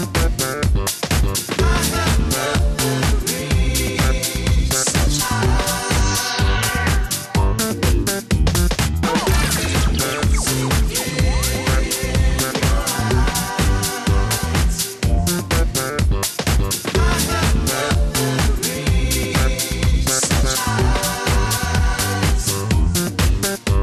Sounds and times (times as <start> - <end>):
Disco: 0.0 - 23.8
House music: 0.0 - 23.8.